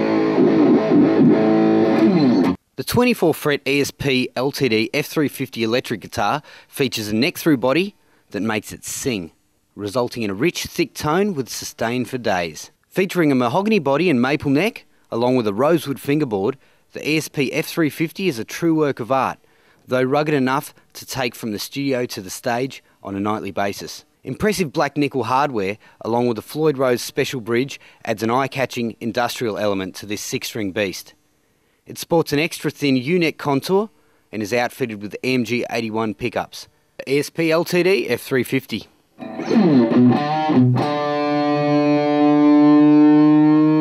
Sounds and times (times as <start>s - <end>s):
Speech: 2.8s - 31.2s, 31.9s - 39.6s.